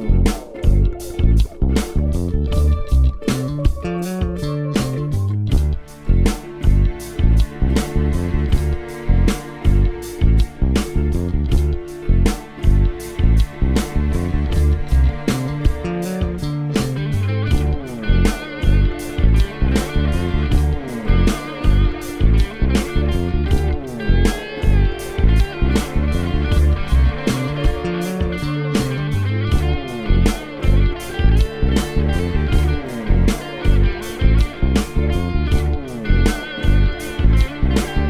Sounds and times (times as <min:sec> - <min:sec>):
Electric guitar: 0:00.0 - 0:38.1
Strum: 0:00.0 - 0:38.1.